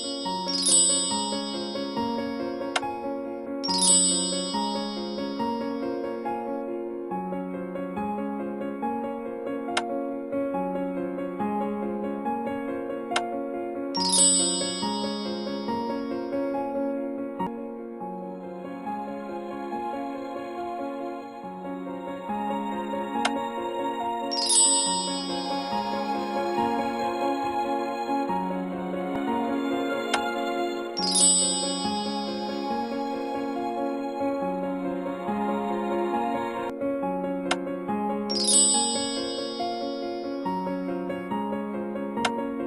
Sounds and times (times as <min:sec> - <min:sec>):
Music: 0:00.0 - 0:42.6.